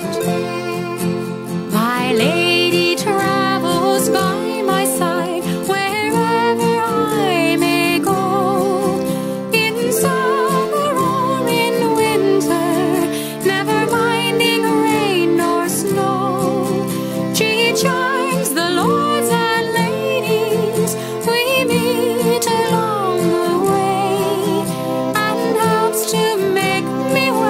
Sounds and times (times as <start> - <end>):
Musical instrument: 0.0 - 27.4.